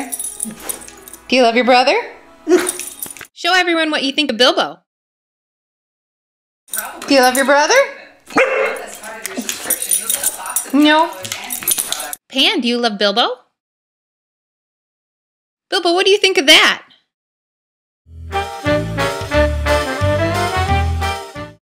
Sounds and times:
Music: 0.0 - 4.3, 18.1 - 21.6
Speech: 3.4 - 4.8, 6.7 - 13.5, 15.7 - 17.0.

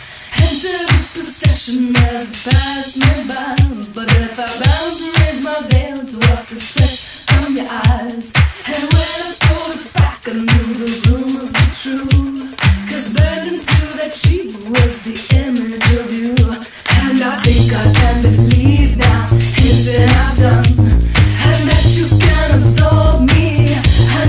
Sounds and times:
Rhythm and blues: 0.0 - 24.2.

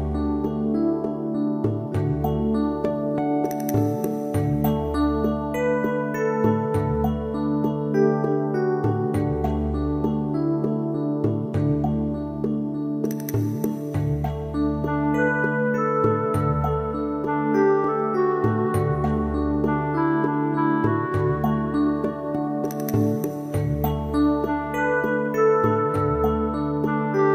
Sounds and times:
Music: 0.0 - 27.3.

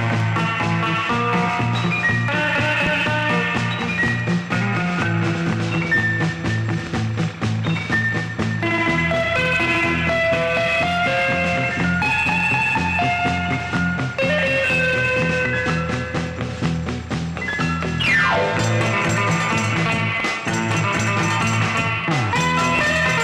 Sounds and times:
Happy music: 0.0 - 23.2.

